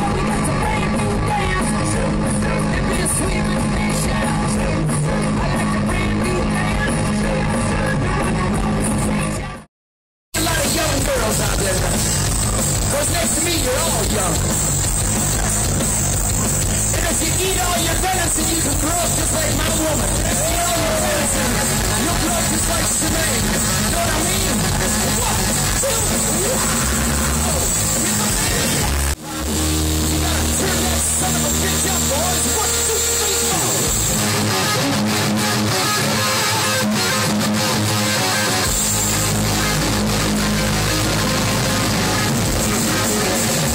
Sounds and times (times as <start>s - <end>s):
Music: 0.0s - 9.7s, 10.3s - 43.7s
Outside, urban or manmade: 0.0s - 9.7s, 10.3s - 43.7s
Speech: 10.4s - 12.1s, 12.9s - 14.5s, 16.9s - 26.8s, 27.4s - 33.9s.